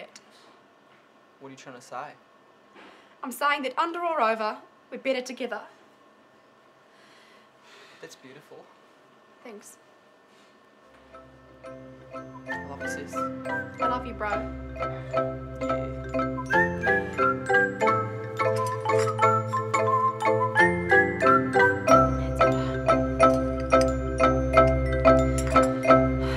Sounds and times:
Glockenspiel: 11.0s - 26.3s.

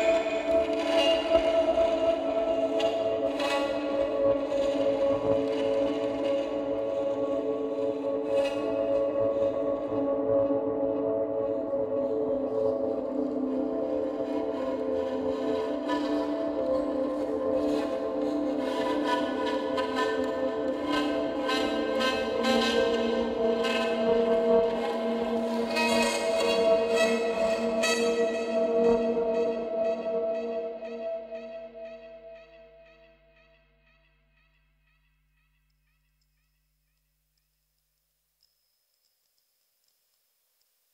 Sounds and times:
Music: 0.0s - 39.6s.

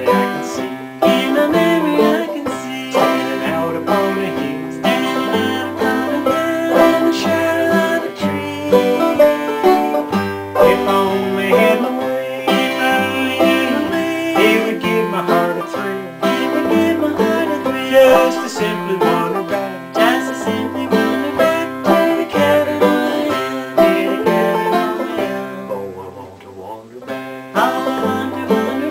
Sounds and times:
Music: 0.0s - 28.9s.

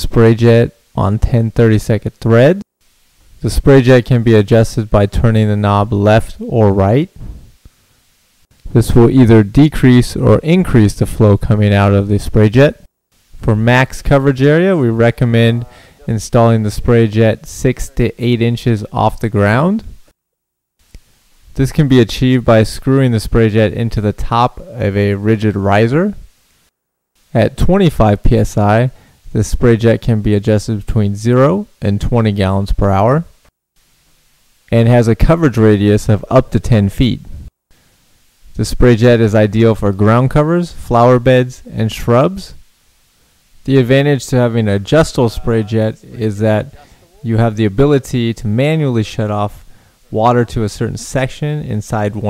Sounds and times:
Speech: 0.0s - 2.7s, 3.4s - 7.2s, 8.7s - 20.0s, 21.6s - 26.2s, 27.4s - 33.4s, 34.7s - 37.3s, 38.6s - 42.6s, 43.7s - 52.2s.

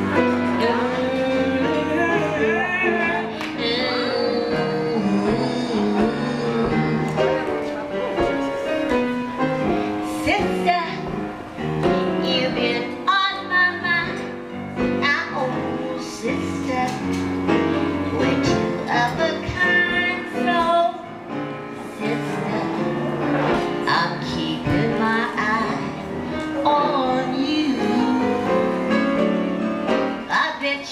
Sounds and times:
Female singing: 0.0s - 8.1s, 10.1s - 11.2s, 12.0s - 14.4s, 15.0s - 17.3s, 18.1s - 21.1s, 21.9s - 23.2s, 23.8s - 29.5s, 30.2s - 30.9s
Music: 0.0s - 30.9s.

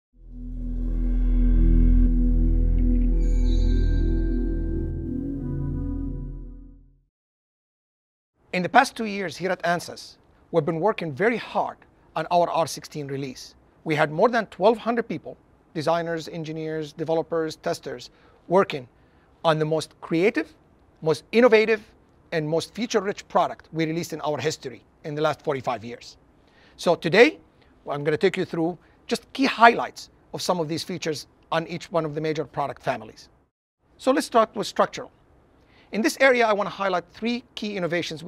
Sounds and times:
Ambient music: 0.2s - 7.0s
Speech: 8.5s - 26.2s, 26.8s - 33.3s, 34.0s - 35.2s, 35.9s - 38.2s.

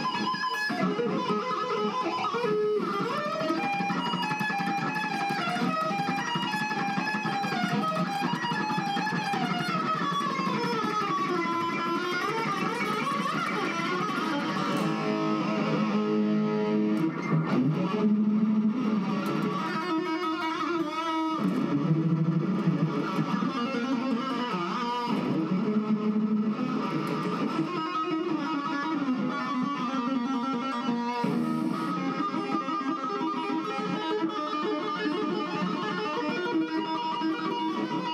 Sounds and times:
Bass guitar: 7.6s - 29.8s.

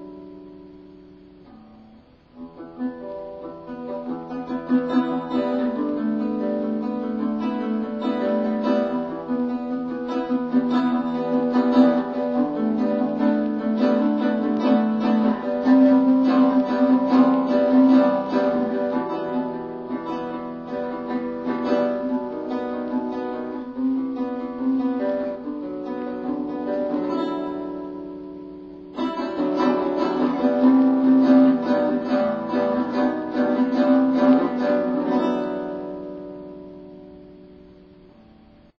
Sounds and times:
Acoustic guitar: 0.0s - 38.7s
Strum: 0.0s - 38.7s.

